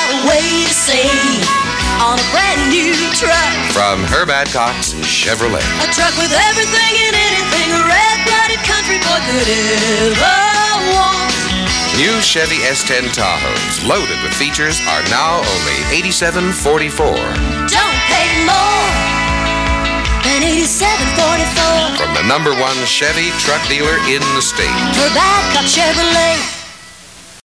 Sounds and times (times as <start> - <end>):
Music: 0.0 - 27.4
Speech: 3.7 - 5.7, 11.9 - 17.4, 22.0 - 24.8.